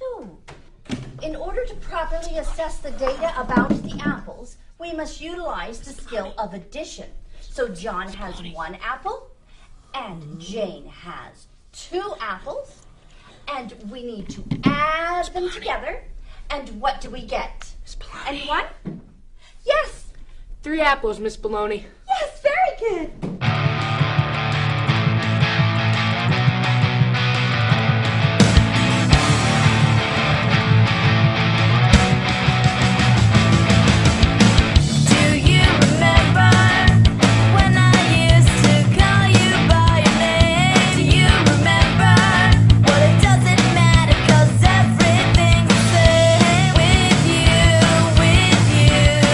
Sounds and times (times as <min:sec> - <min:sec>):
Speech: 0:00.0 - 0:00.4, 0:01.2 - 0:09.3, 0:09.9 - 0:12.8, 0:13.5 - 0:18.8, 0:19.6 - 0:23.2.